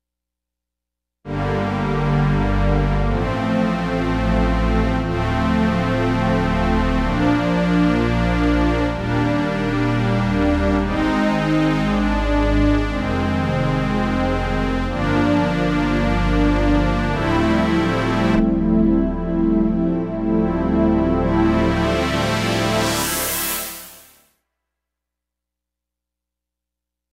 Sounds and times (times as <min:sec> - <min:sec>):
Music: 0:01.3 - 0:24.4.